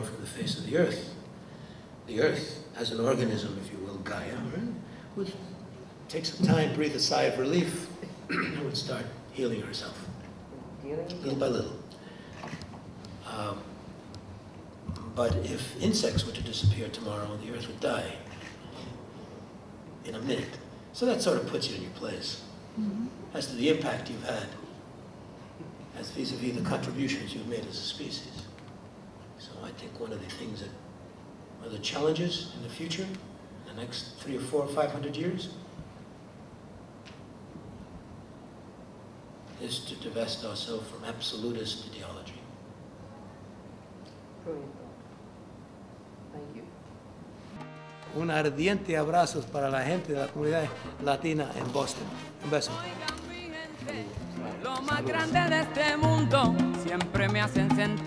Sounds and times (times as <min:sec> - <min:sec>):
Speech: 0:15.2 - 0:18.2, 0:48.2 - 0:53.0
Salsa music: 0:47.5 - 0:58.0.